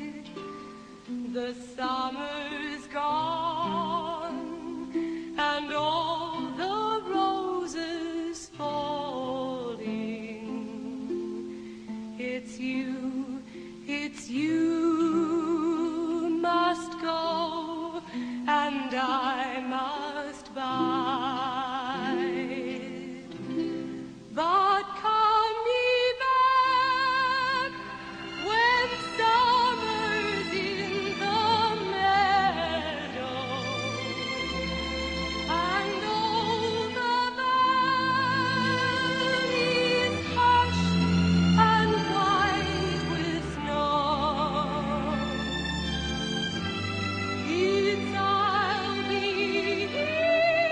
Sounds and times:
Female singing: 0.0 - 0.4, 1.2 - 11.3, 12.2 - 23.4, 24.3 - 33.9, 35.5 - 45.3, 47.4 - 50.7
Music: 0.0 - 50.7.

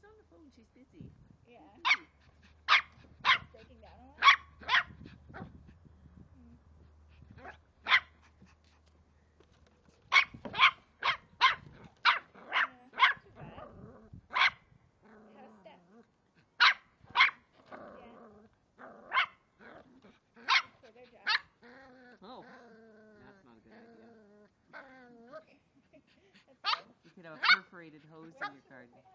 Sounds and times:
Yip: 1.8 - 2.1, 2.7 - 3.5, 4.2 - 5.5, 7.4 - 8.1, 10.1 - 13.2, 14.4 - 14.6, 16.6 - 17.4, 19.1 - 19.4, 20.5 - 20.7, 26.6 - 27.7.

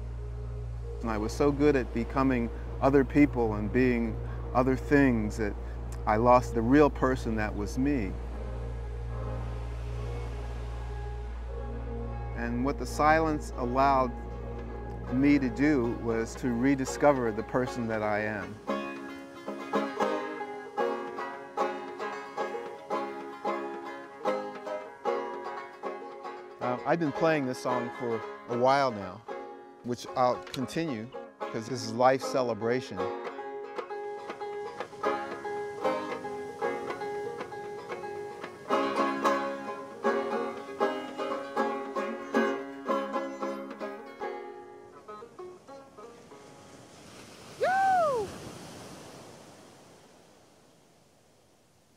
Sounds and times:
Banjo: 0.0 - 46.8
Speech: 1.0 - 8.2, 12.4 - 14.2, 15.1 - 18.6, 26.6 - 29.2, 29.9 - 33.1.

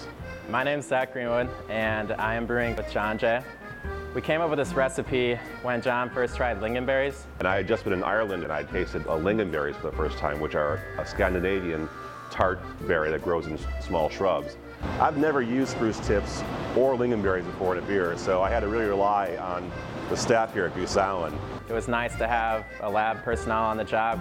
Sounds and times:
Music: 0.0 - 24.2
Speech: 0.5 - 3.5, 4.2 - 24.2.

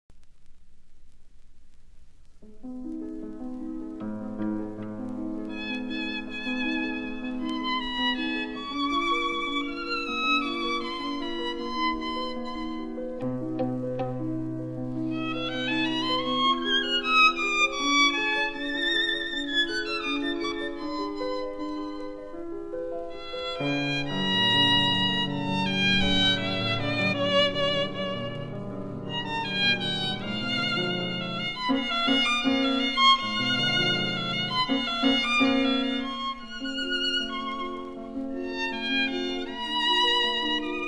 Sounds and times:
Violin, fiddle: 5.4 - 13.3, 14.9 - 22.4, 23.1 - 40.8.

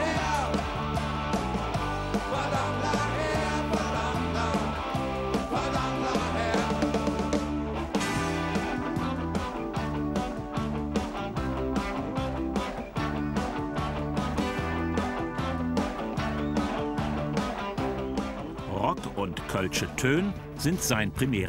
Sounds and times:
Music: 0.0 - 21.4
Speech: 18.7 - 21.4.

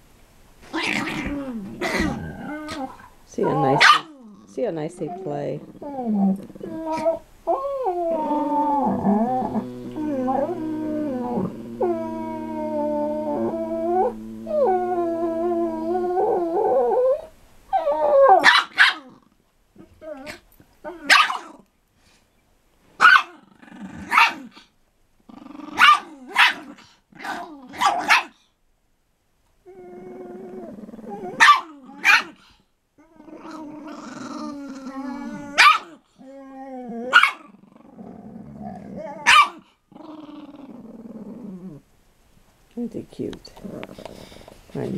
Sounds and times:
Bark: 3.8 - 4.2, 18.4 - 19.1, 21.1 - 21.5, 23.0 - 23.4, 24.1 - 24.5, 25.8 - 28.4, 31.4 - 32.4, 35.6 - 36.0, 37.1 - 37.5, 39.2 - 39.6.

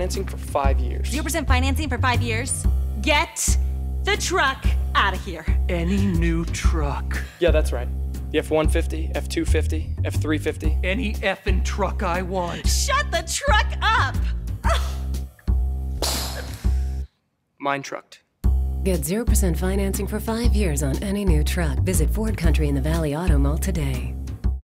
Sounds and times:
Music: 0.0 - 17.1, 18.4 - 24.6
Speech: 5.2 - 14.1, 17.6 - 18.2, 18.9 - 24.1.

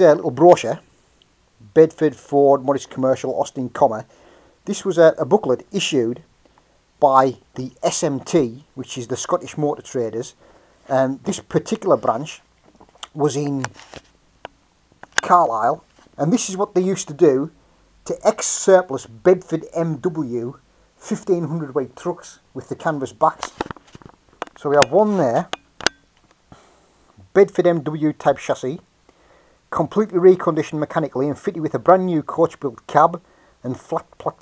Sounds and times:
Speech: 0.0 - 0.9, 1.6 - 6.3, 7.0 - 13.8, 15.2 - 23.6, 24.6 - 25.5, 27.2 - 28.9, 29.7 - 34.4.

